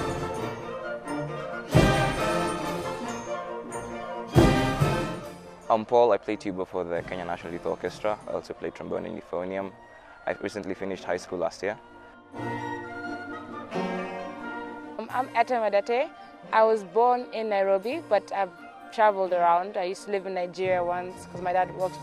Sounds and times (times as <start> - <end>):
Orchestra: 0.0 - 15.5.